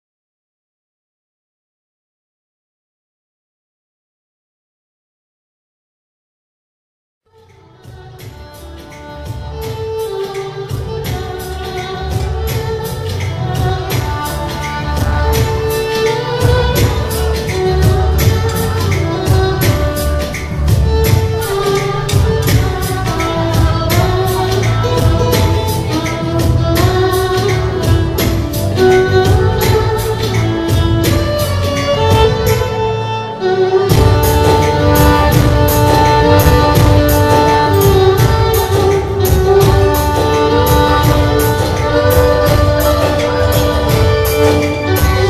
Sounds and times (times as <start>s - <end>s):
Music: 7.3s - 45.2s.